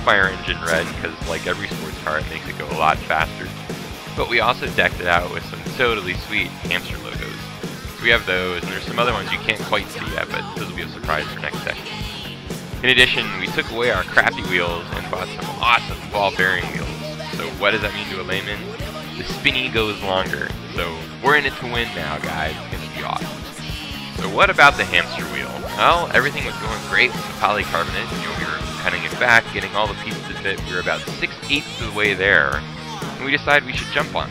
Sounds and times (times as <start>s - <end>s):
Speech: 0.0s - 3.5s, 4.2s - 7.4s, 8.0s - 12.2s, 12.8s - 34.3s
Music: 0.0s - 34.3s.